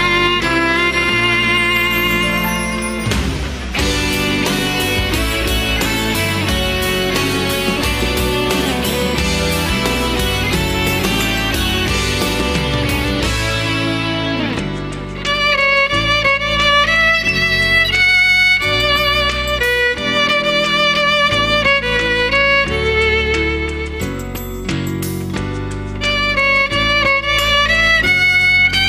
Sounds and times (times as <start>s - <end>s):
Violin, fiddle: 0.0s - 24.7s, 26.0s - 28.8s.